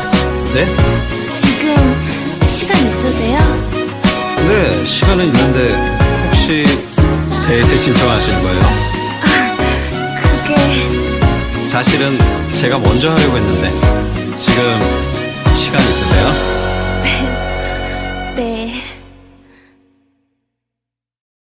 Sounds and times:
Music: 0:00.0 - 0:20.5
Narration, monologue: 0:00.1 - 0:19.7.

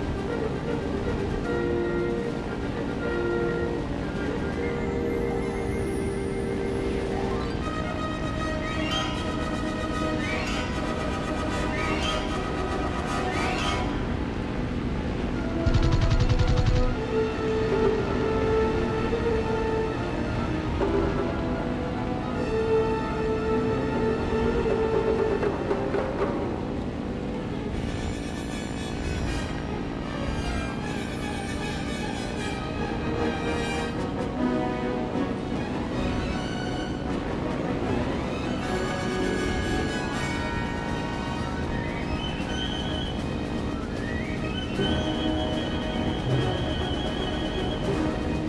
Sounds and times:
Music: 0:00.0 - 0:48.4.

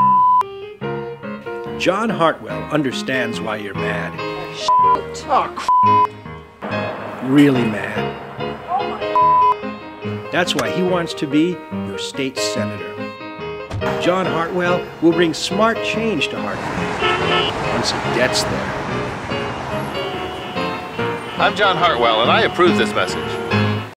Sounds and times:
Music: 0:00.0 - 0:23.9
Speech: 0:01.8 - 0:05.7, 0:10.3 - 0:12.8, 0:14.0 - 0:16.6, 0:17.7 - 0:18.7, 0:21.4 - 0:23.4.

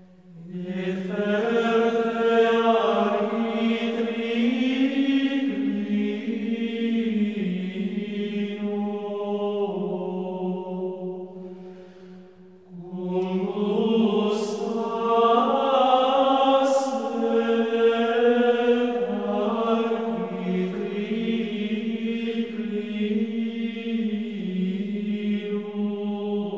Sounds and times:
Music: 0:00.0 - 0:26.5.

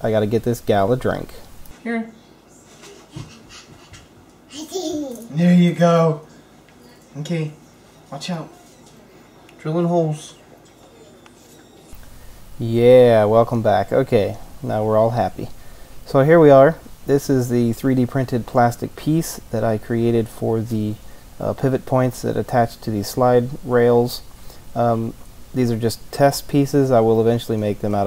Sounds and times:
Speech: 0:00.0 - 0:01.4, 0:16.1 - 0:24.2, 0:24.8 - 0:28.0.

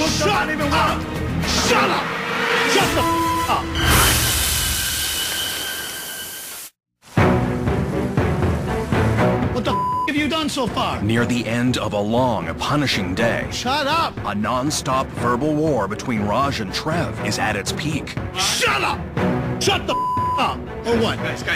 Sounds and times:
Theme music: 0:00.0 - 0:04.8, 0:07.2 - 0:21.5.

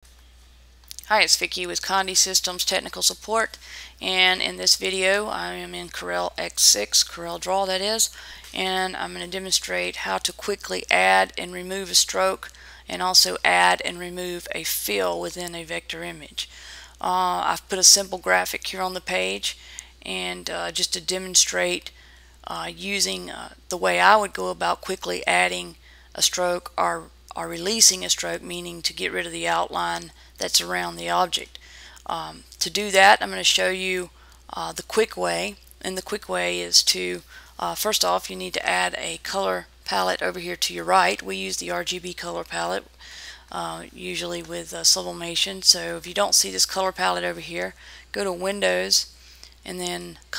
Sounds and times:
Speech: 0:00.9 - 0:21.9, 0:22.5 - 0:42.9, 0:43.5 - 0:50.3.

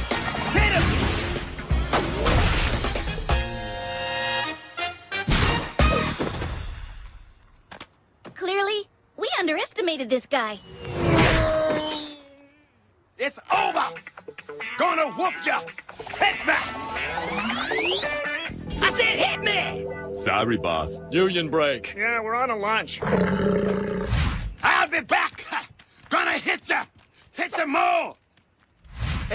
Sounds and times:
Music: 0:00.0 - 0:07.2, 0:13.5 - 0:23.0
Roar: 0:23.0 - 0:24.2.

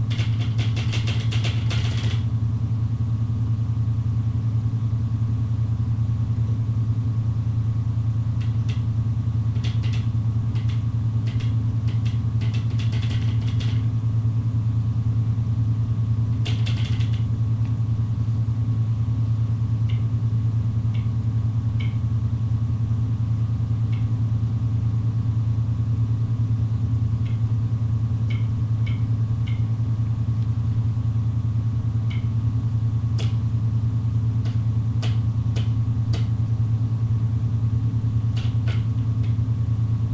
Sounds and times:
Vibration: 0:00.0 - 0:02.4, 0:08.4 - 0:14.0, 0:16.3 - 0:17.5.

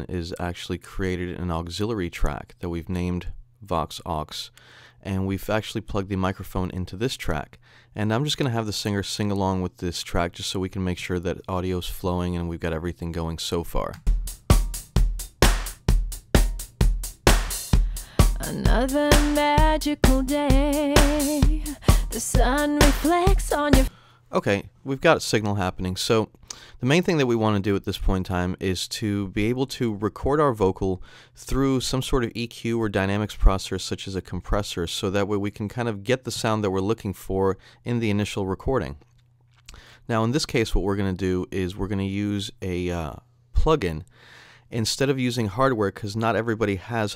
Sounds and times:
Speech: 0:00.0 - 0:14.0, 0:18.4 - 0:19.0, 0:23.0 - 0:39.0, 0:40.1 - 0:44.1, 0:44.7 - 0:47.1
Music: 0:14.0 - 0:23.9.

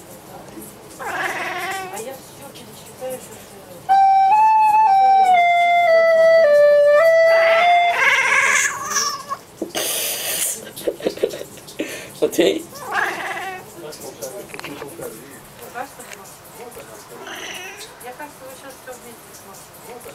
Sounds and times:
Speech: 0:01.8 - 0:03.9, 0:18.0 - 0:20.1.

